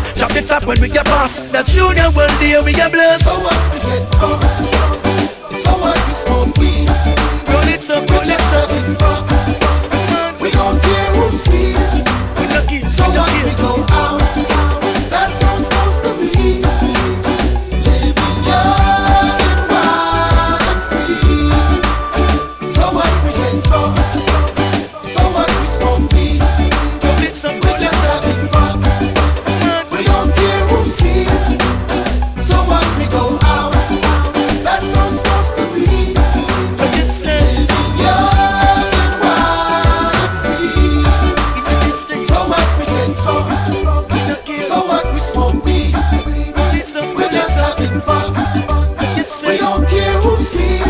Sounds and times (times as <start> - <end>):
Afrobeat: 0.0 - 50.9.